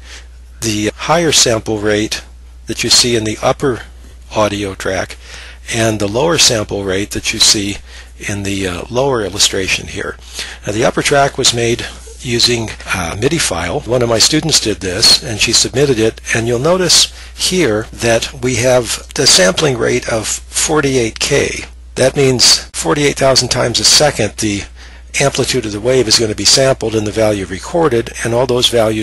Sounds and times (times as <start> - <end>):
Speech: 0.6 - 29.0.